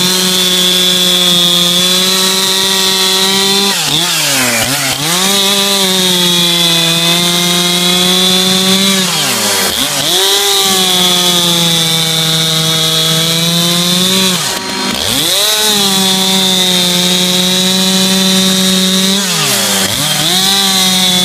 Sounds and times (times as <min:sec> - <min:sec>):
Chainsaw: 0:00.0 - 0:21.2.